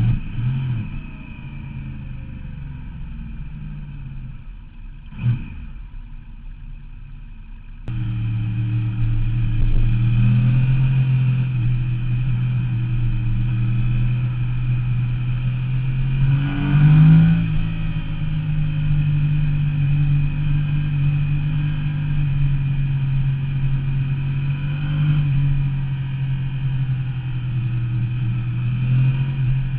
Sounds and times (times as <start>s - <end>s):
Accelerating, revving, vroom: 0.0s - 1.1s, 5.1s - 5.7s, 7.9s - 29.7s
Vehicle: 0.0s - 29.7s.